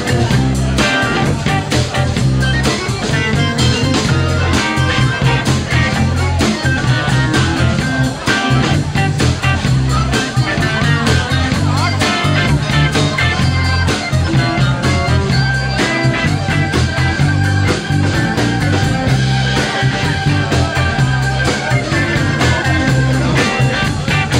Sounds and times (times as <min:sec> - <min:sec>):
Speech: 0:00.0 - 0:24.3.